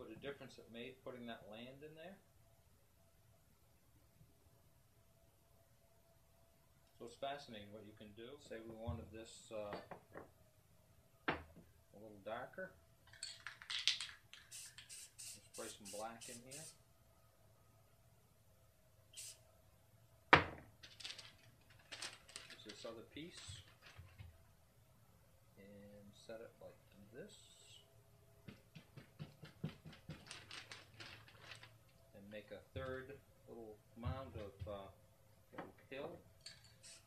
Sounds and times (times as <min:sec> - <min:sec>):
Speech: 0:00.0 - 0:02.2, 0:07.0 - 0:09.9, 0:12.0 - 0:12.8, 0:15.4 - 0:16.8, 0:22.6 - 0:23.7, 0:25.6 - 0:27.9, 0:32.2 - 0:35.0, 0:35.7 - 0:36.2
Inside, small room: 0:00.0 - 0:37.0.